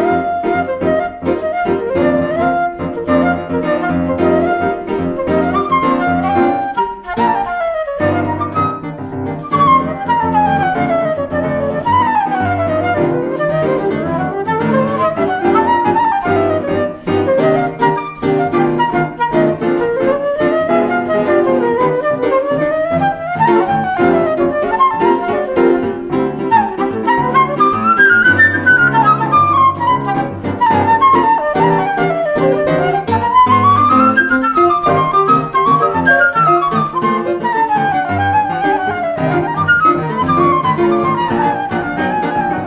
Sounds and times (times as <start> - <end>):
Flute: 0.0 - 42.6.